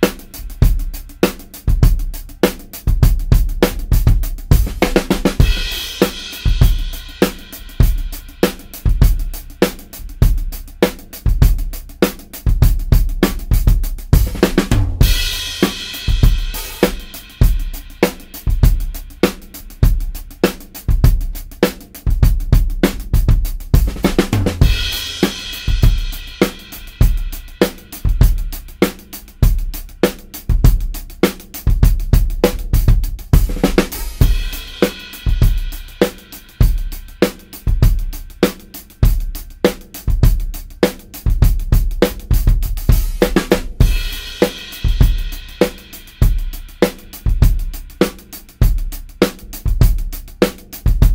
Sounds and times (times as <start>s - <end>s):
Bass drum: 0.0s - 51.1s
Drum kit: 0.0s - 51.1s.